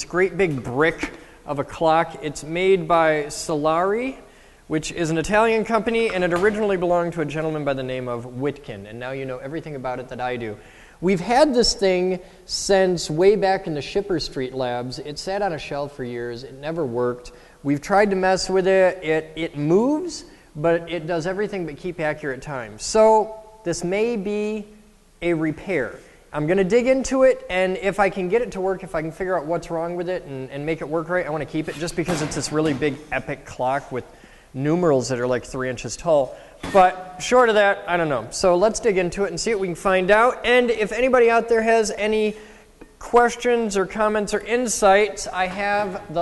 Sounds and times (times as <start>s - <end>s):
Speech: 0.0s - 46.2s.